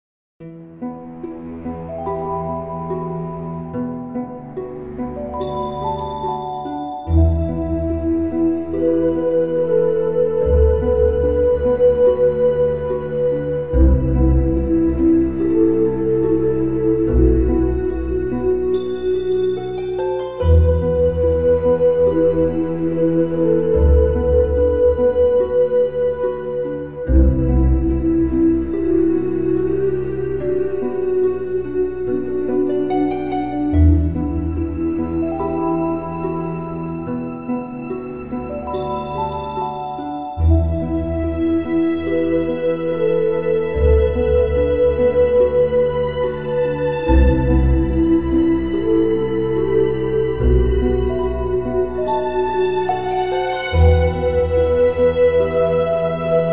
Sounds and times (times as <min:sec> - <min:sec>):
Background music: 0:00.4 - 0:56.5.